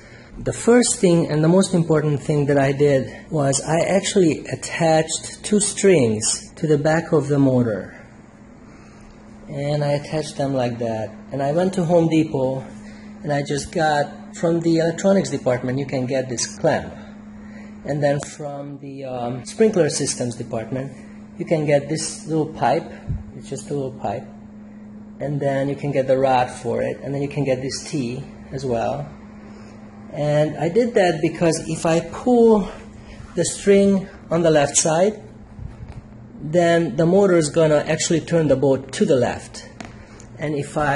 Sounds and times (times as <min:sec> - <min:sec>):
Speech: 0:00.4 - 0:08.1, 0:09.5 - 0:17.1, 0:17.8 - 0:24.4, 0:25.2 - 0:29.1, 0:30.1 - 0:32.8, 0:33.4 - 0:35.3, 0:36.4 - 0:39.8, 0:40.4 - 0:40.9.